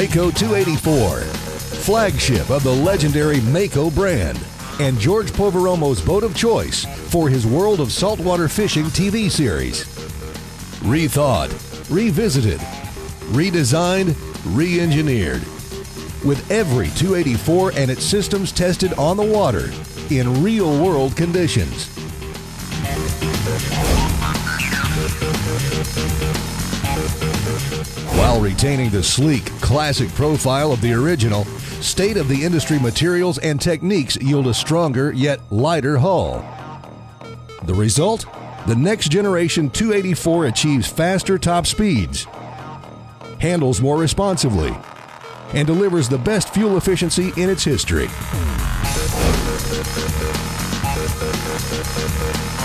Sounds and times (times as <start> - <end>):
Speech: 0.0 - 9.9, 10.8 - 12.7, 13.3 - 15.5, 16.2 - 21.9, 28.1 - 36.4, 37.6 - 42.3, 43.4 - 44.8, 45.5 - 48.2
Music: 0.0 - 52.6.